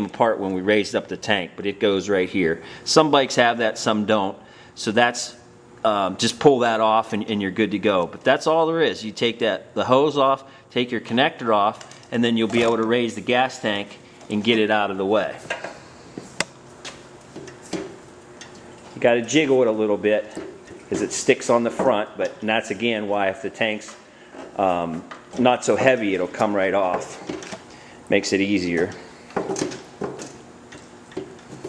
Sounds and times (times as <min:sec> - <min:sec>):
Speech: 0:00.0 - 0:15.5, 0:19.0 - 0:24.0, 0:24.6 - 0:27.2, 0:28.1 - 0:29.0.